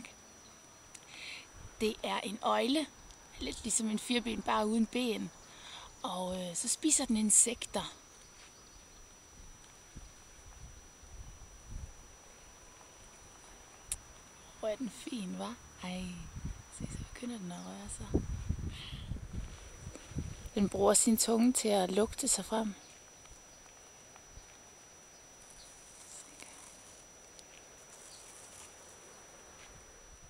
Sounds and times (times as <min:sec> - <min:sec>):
Speech: 0:01.8 - 0:05.3, 0:06.0 - 0:08.0, 0:14.6 - 0:18.2, 0:20.6 - 0:22.8.